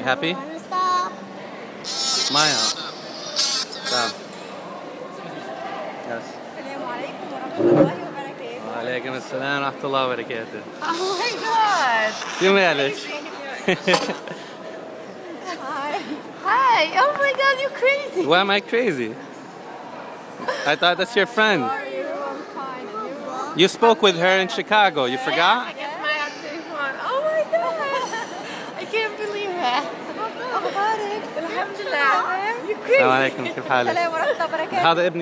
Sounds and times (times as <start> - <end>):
Inside, public space: 0.0 - 35.2.